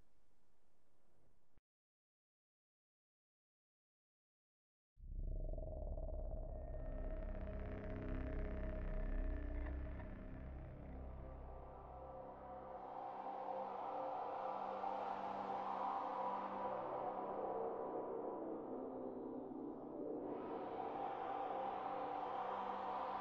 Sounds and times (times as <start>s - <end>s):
Music: 5.0s - 23.2s.